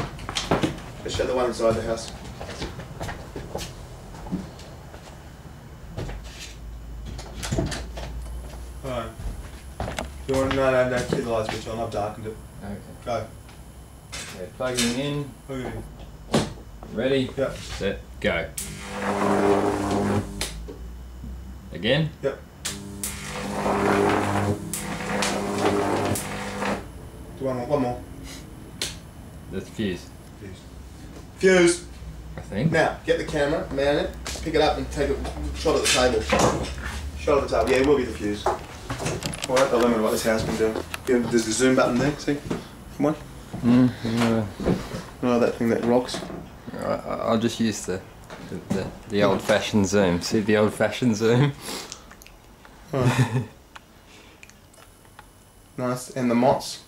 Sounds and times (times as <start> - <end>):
Speech: 1.0 - 2.2, 8.8 - 9.2, 10.3 - 13.3, 14.3 - 15.9, 16.9 - 18.6, 27.4 - 28.0, 29.5 - 30.6, 31.4 - 38.6, 39.5 - 43.2, 45.2 - 51.6, 55.8 - 56.8.